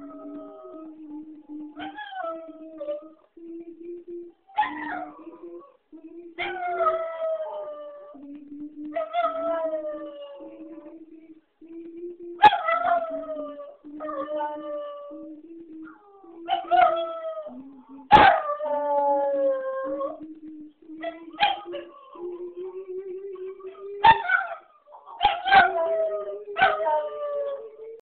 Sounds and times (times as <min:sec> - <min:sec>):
Howl: 0:00.0 - 0:03.3, 0:04.5 - 0:11.3, 0:12.4 - 0:28.0.